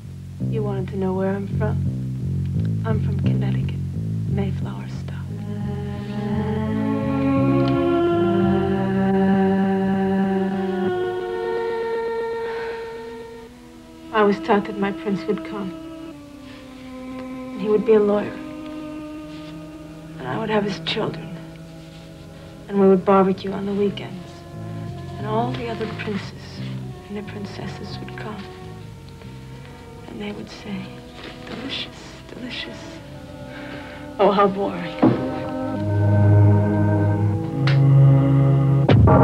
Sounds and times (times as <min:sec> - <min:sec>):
Music: 0:00.0 - 0:39.2
Speech: 0:00.5 - 0:01.8, 0:02.8 - 0:03.8, 0:04.4 - 0:05.4, 0:14.1 - 0:15.8, 0:17.6 - 0:18.4, 0:20.2 - 0:21.4, 0:22.7 - 0:24.4, 0:25.2 - 0:28.5, 0:30.1 - 0:33.0, 0:34.2 - 0:35.2.